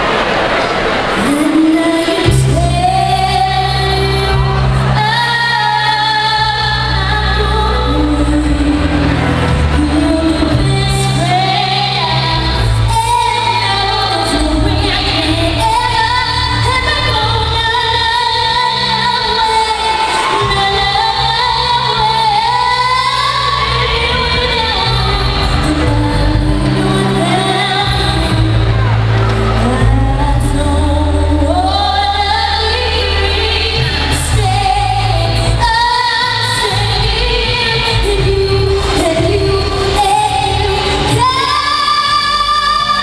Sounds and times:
Music: 1.2 - 43.0
Child singing: 9.8 - 28.7, 29.6 - 43.0.

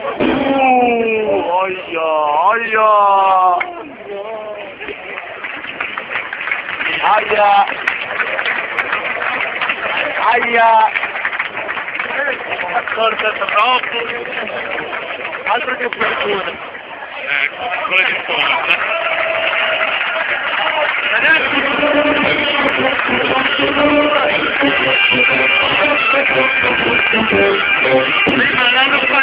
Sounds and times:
Outside, urban or manmade: 0.0 - 29.2.

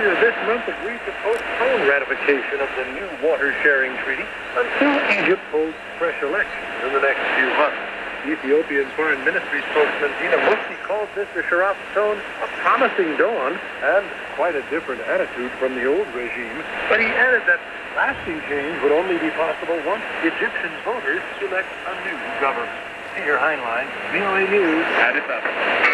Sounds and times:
Speech: 0.0 - 25.6
Radio: 0.0 - 25.9.

